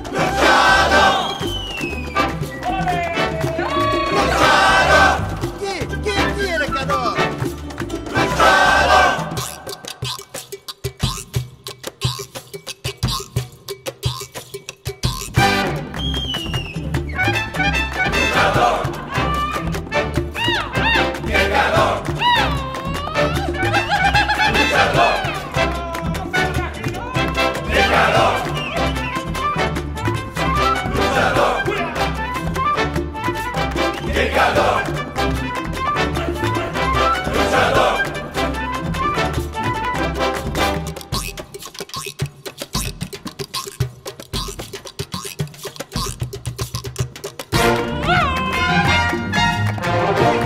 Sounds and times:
Soundtrack music: 0:17.0 - 0:41.2, 0:47.6 - 0:50.4.

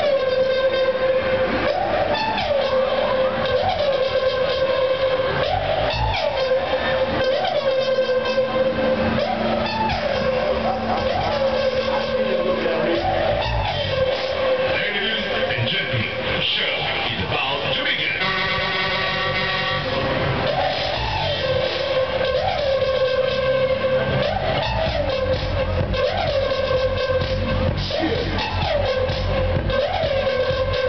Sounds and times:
Music: 0:00.0 - 0:30.8
Speech: 0:14.7 - 0:18.4.

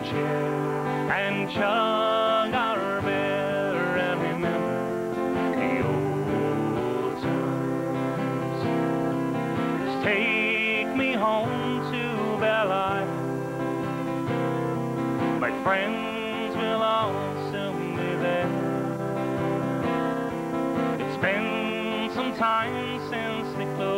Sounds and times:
Music: 0:00.0 - 0:23.9.

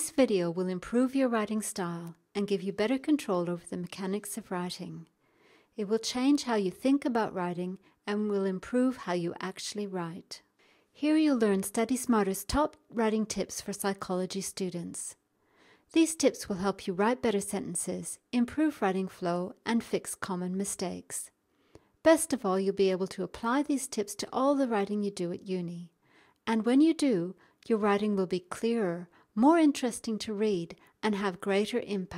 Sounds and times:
Speech: 0:00.0 - 0:05.1, 0:05.8 - 0:10.4, 0:11.0 - 0:15.2, 0:16.0 - 0:21.3, 0:22.1 - 0:25.9, 0:26.5 - 0:32.1.

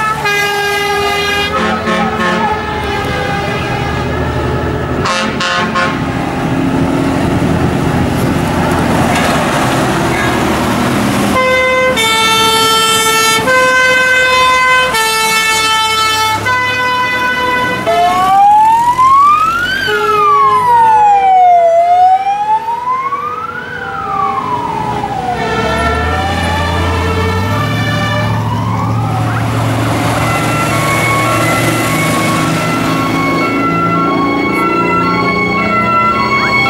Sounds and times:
Fire engine, fire truck (siren): 0:00.0 - 0:36.7.

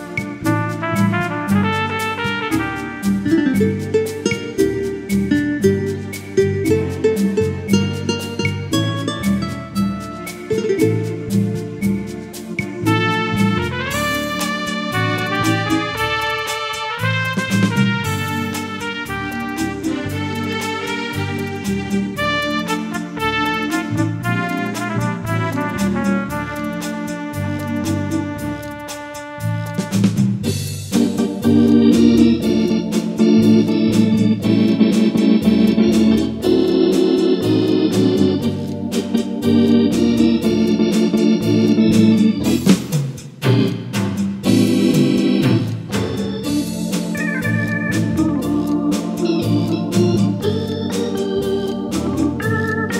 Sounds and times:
Electronic organ: 0:02.6 - 0:28.8, 0:30.5 - 0:42.8, 0:43.5 - 0:52.9.

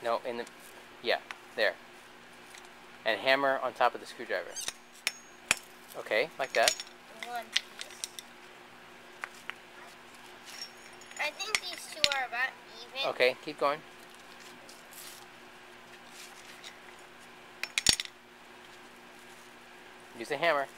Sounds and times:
Child speech, kid speaking: 0:07.1 - 0:07.6, 0:09.8 - 0:10.0, 0:11.2 - 0:13.4.

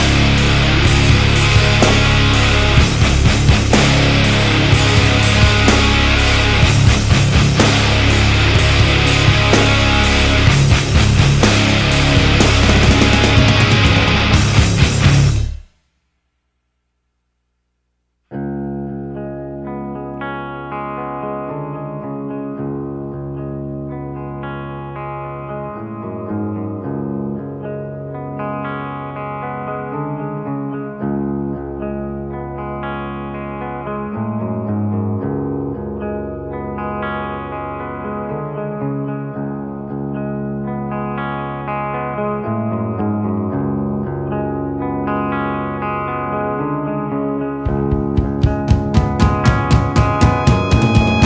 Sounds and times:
Music: 0:00.0 - 0:16.1, 0:18.3 - 0:51.2.

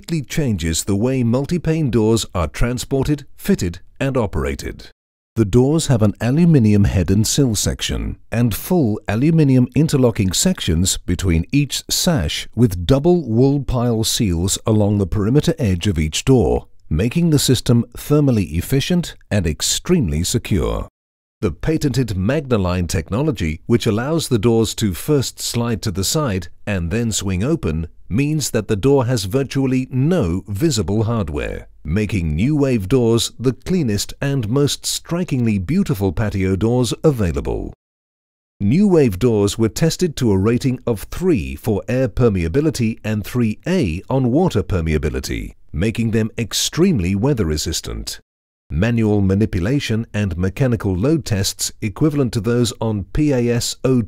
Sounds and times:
Speech: 0:00.0 - 0:37.8, 0:38.6 - 0:54.0.

